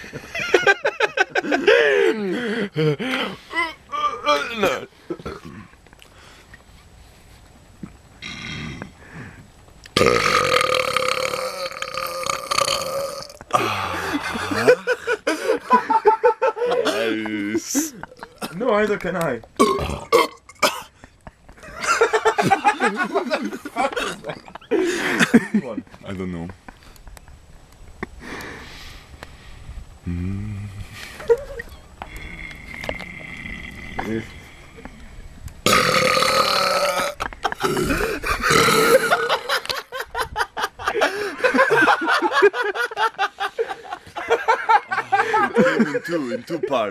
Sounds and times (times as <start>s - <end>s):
Burping, eructation: 3.6s - 5.8s, 8.2s - 9.0s, 9.9s - 14.8s, 17.0s - 18.6s, 19.6s - 20.9s, 30.0s - 31.0s, 32.0s - 34.9s, 35.6s - 39.5s.